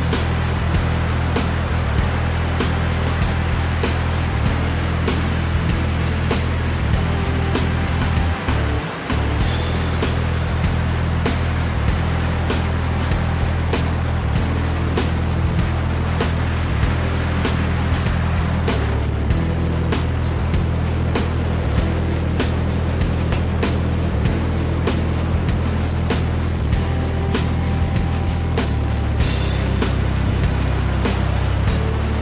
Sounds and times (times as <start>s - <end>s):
Motorboat, speedboat: 0.0s - 32.2s
Music: 0.0s - 32.2s.